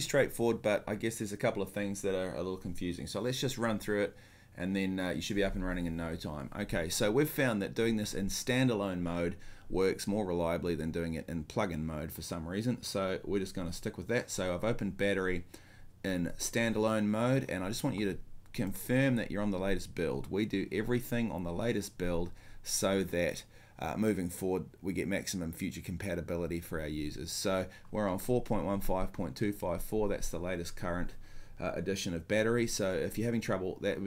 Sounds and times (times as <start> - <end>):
Speech: 0.0 - 34.0.